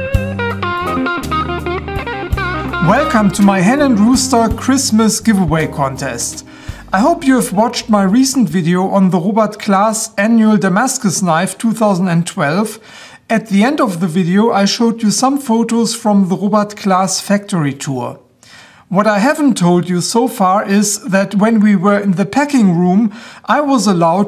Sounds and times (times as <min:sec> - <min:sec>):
Music: 0:00.0 - 0:08.2
Speech: 0:02.8 - 0:18.2, 0:18.9 - 0:24.2.